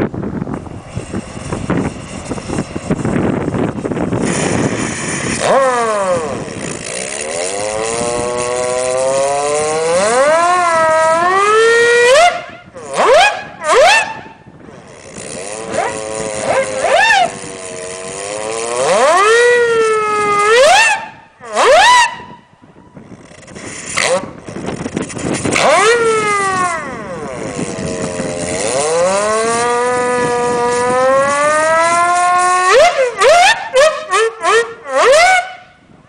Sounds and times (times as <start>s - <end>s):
Siren: 10.0s - 14.3s, 19.0s - 22.4s, 30.8s - 35.8s.